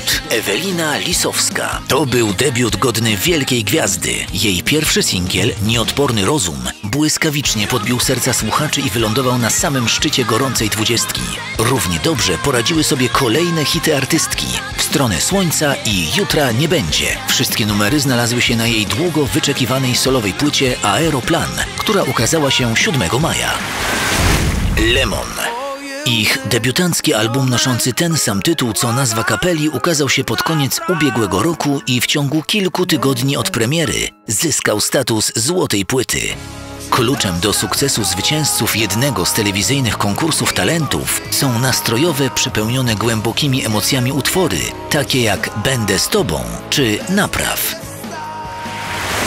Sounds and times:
Speech: 0:00.0 - 0:23.6, 0:24.8 - 0:47.8
Music: 0:00.0 - 0:49.2.

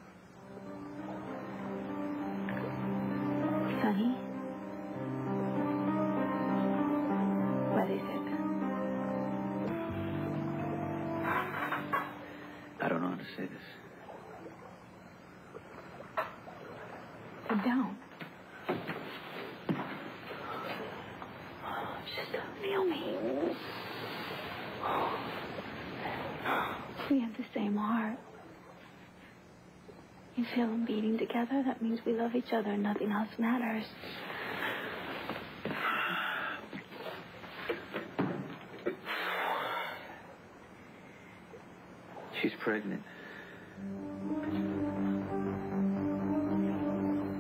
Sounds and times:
Music: 0:00.1 - 0:13.0, 0:43.6 - 0:47.4.

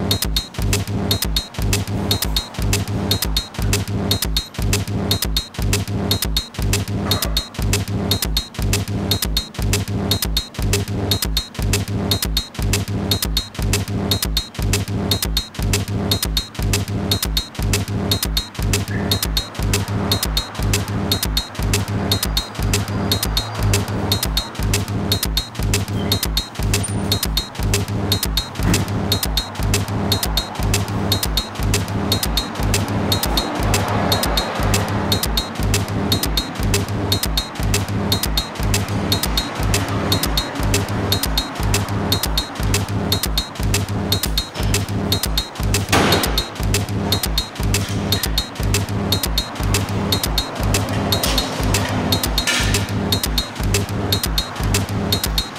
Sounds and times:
Music: 0:00.0 - 0:55.5.

